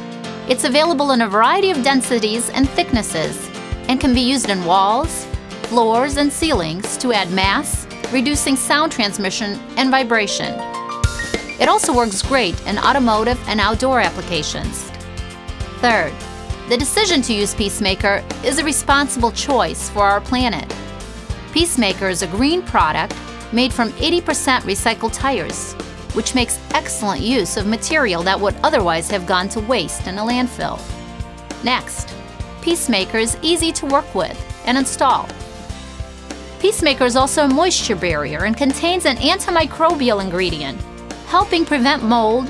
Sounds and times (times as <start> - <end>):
Music: 0.0 - 42.5
Speech: 0.5 - 10.6, 11.6 - 14.9, 15.8 - 20.7, 21.6 - 30.9, 31.6 - 35.4, 36.6 - 42.5.